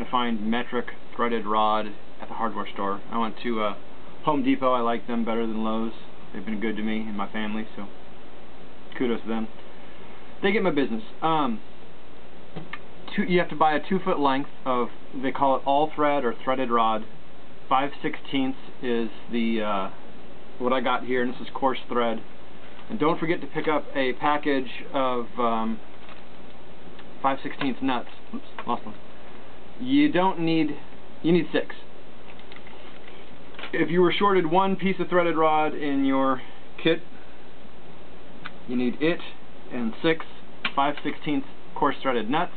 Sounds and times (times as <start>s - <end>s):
Speech: 0.0s - 8.0s, 8.9s - 9.6s, 10.4s - 11.7s, 13.1s - 17.1s, 17.7s - 20.0s, 20.6s - 22.3s, 22.9s - 25.8s, 27.2s - 29.0s, 29.8s - 31.9s, 33.6s - 37.2s, 38.6s - 42.5s.